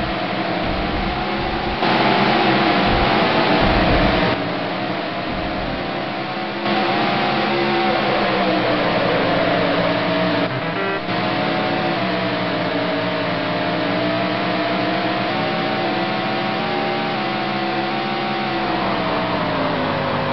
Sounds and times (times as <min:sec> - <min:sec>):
Truck: 0:00.0 - 0:20.3.